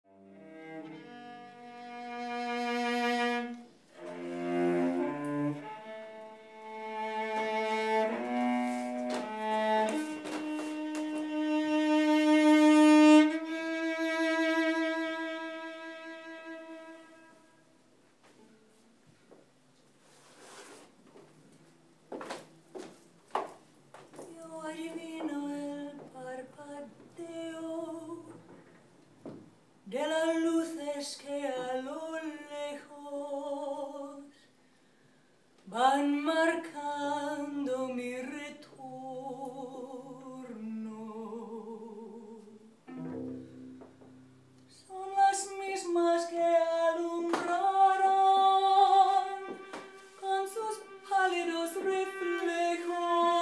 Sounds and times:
Cello: 0.0 - 22.1, 24.2 - 53.4.

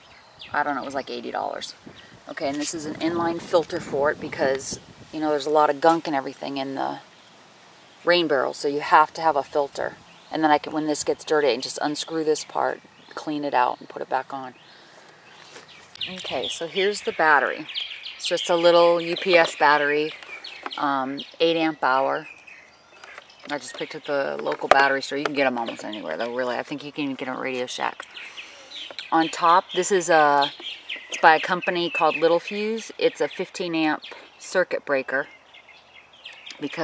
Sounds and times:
Bird vocalization, bird call, bird song: 0.0 - 3.9, 6.4 - 36.8
Speech: 0.6 - 7.0, 8.1 - 14.6, 16.0 - 20.2, 20.8 - 22.2, 23.5 - 28.0, 29.1 - 30.5, 31.1 - 35.3, 36.5 - 36.8.

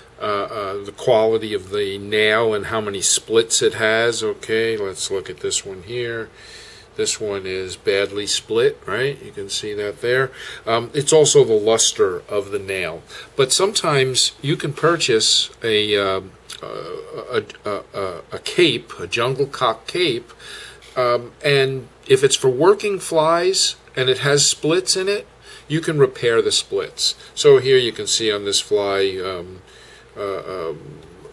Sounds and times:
Speech: 0.2 - 6.3, 7.0 - 29.6, 30.2 - 31.3.

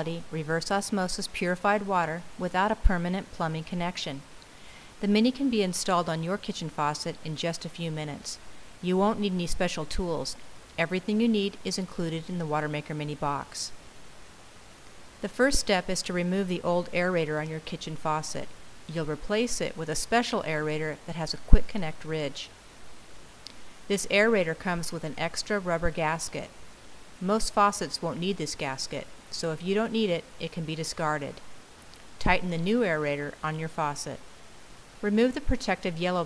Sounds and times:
Speech: 0.0 - 4.3, 5.0 - 13.8, 15.2 - 22.5, 23.9 - 26.5, 27.2 - 31.4, 32.2 - 34.2, 35.0 - 36.2.

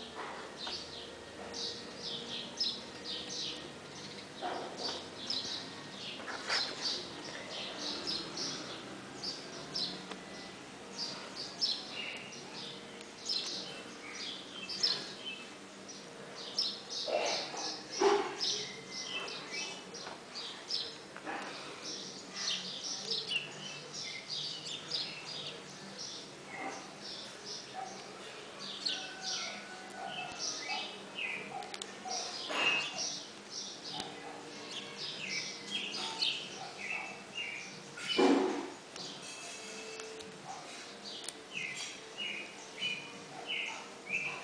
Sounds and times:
Animal: 17.0 - 18.5.

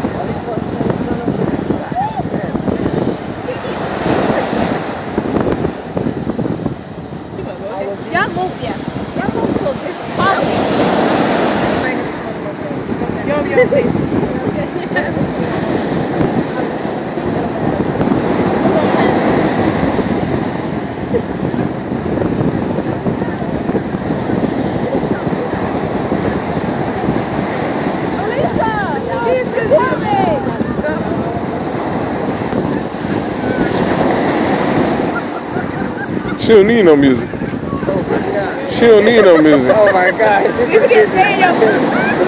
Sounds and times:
Ocean: 0.0 - 42.2.

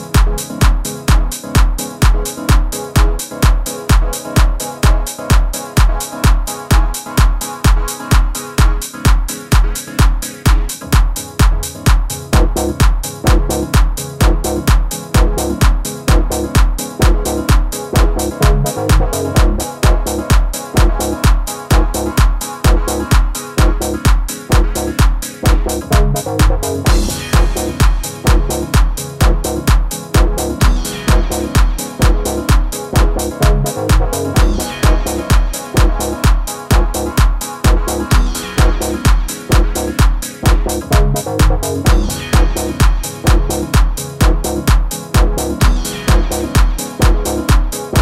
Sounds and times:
Electronic music: 0.0 - 48.0.

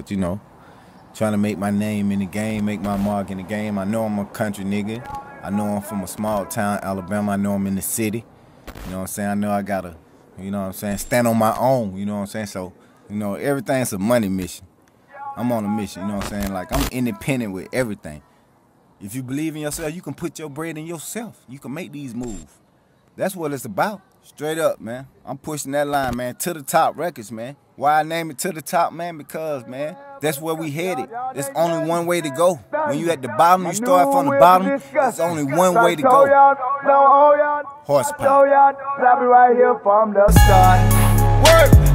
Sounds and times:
Speech: 0.0 - 0.4, 1.2 - 8.2, 8.9 - 18.2, 19.0 - 22.6, 23.2 - 36.3, 37.9 - 38.4.

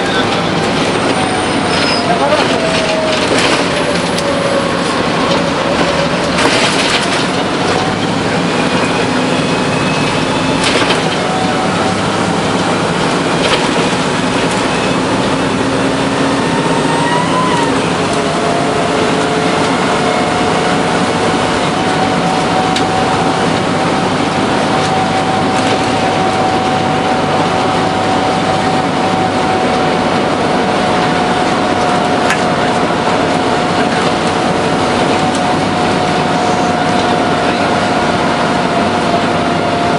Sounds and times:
Bus: 0.0 - 39.9.

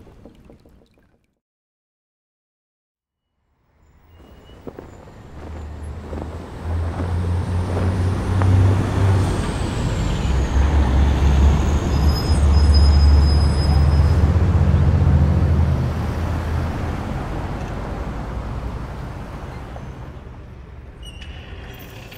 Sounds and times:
Traffic noise, roadway noise: 3.6 - 22.1.

